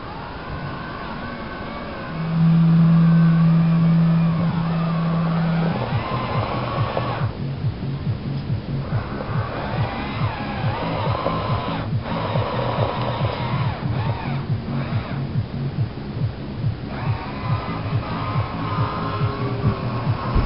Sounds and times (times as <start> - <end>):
Music: 0.0 - 20.4.